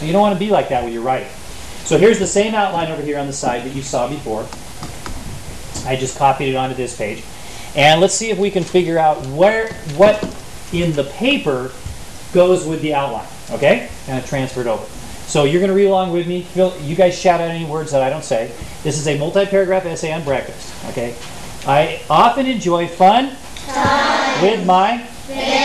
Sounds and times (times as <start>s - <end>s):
Speech: 0.0s - 4.5s, 5.8s - 7.2s, 12.4s - 25.6s.